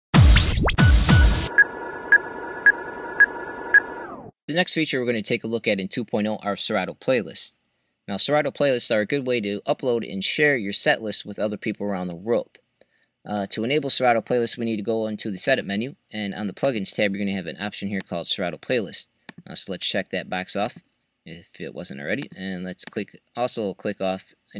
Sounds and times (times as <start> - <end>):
Speech: 4.5 - 12.6, 13.3 - 24.5.